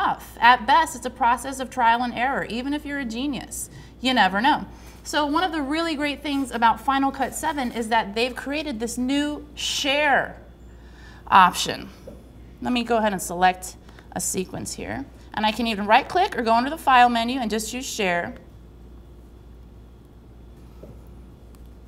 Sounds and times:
Speech: 0.0s - 10.4s, 11.3s - 12.0s, 12.6s - 18.4s.

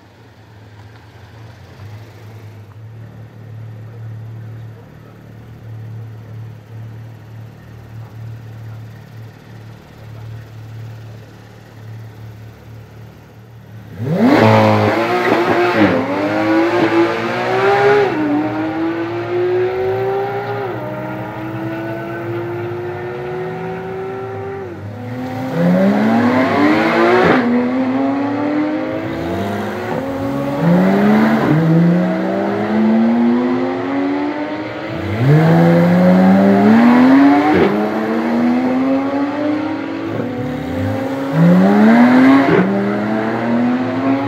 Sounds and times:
Car: 0.0s - 44.2s
Medium engine (mid frequency): 0.0s - 44.2s
Accelerating, revving, vroom: 13.9s - 44.2s.

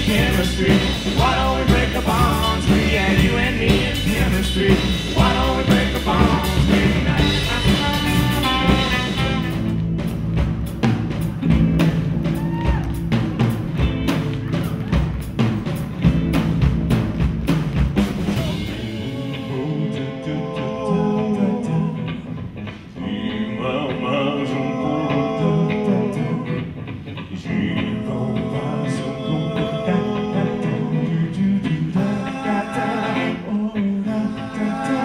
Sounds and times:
Singing: 0.0s - 9.6s, 18.3s - 22.4s, 23.0s - 35.0s
Jazz: 0.0s - 35.0s.

